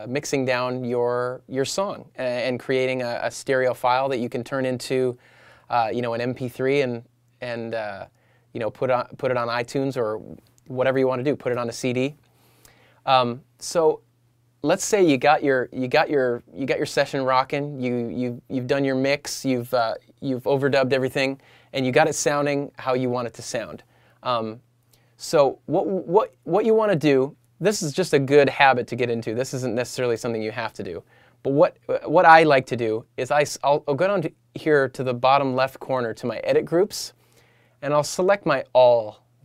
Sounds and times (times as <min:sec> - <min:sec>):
Speech: 0:00.0 - 0:12.2, 0:13.1 - 0:14.0, 0:14.6 - 0:24.6, 0:25.2 - 0:37.2, 0:37.8 - 0:39.4.